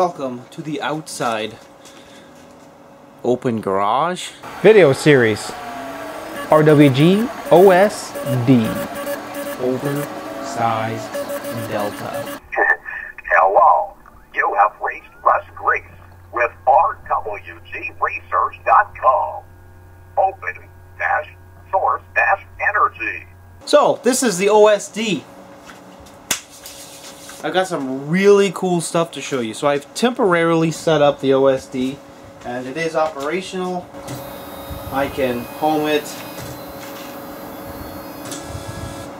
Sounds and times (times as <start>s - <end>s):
Speech: 0.0s - 1.6s, 3.2s - 5.5s, 6.5s - 8.9s, 9.6s - 19.4s, 20.2s - 25.3s, 27.4s - 33.9s, 34.9s - 36.2s
Printer: 4.5s - 12.4s, 34.0s - 39.1s.